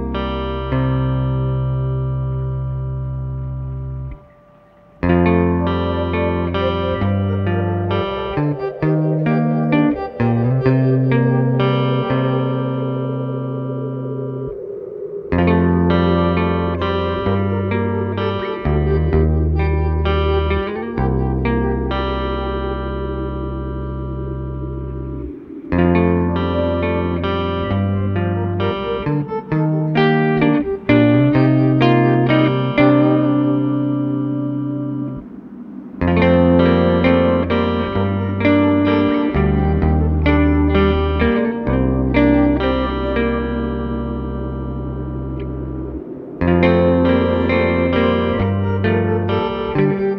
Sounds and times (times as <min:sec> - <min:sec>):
Inside, small room: 0:00.0 - 0:50.1
Music: 0:00.0 - 0:50.1.